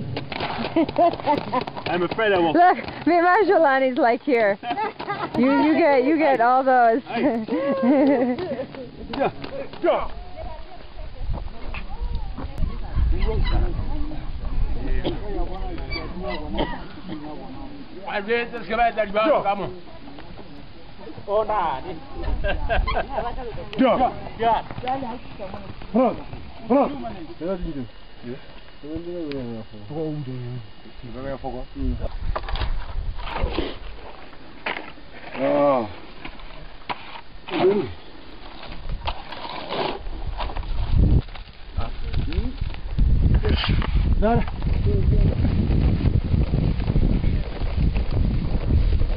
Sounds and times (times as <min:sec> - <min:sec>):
Outside, rural or natural: 0:00.0 - 0:49.1.